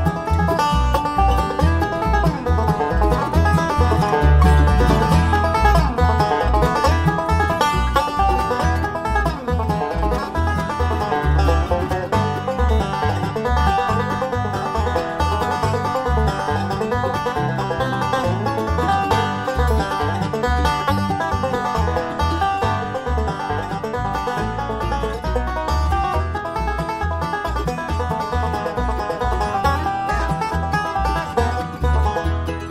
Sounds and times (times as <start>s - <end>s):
Music: 0.0s - 32.7s.